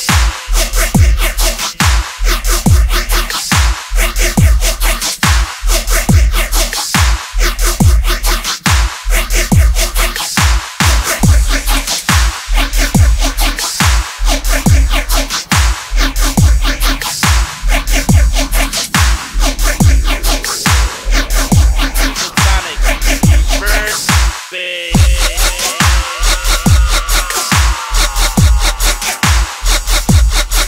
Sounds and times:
Dubstep: 0:00.0 - 0:30.6.

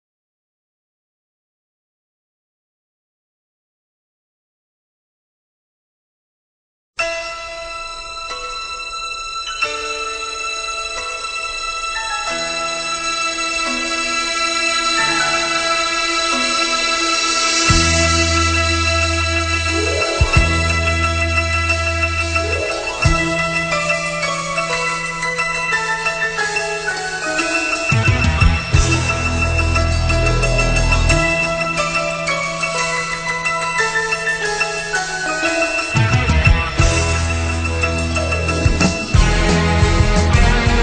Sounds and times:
Music: 0:07.0 - 0:40.8.

